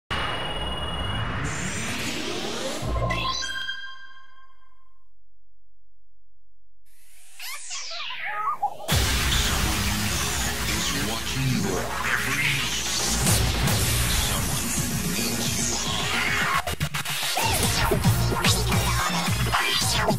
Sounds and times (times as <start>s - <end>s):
Music: 8.9s - 20.1s.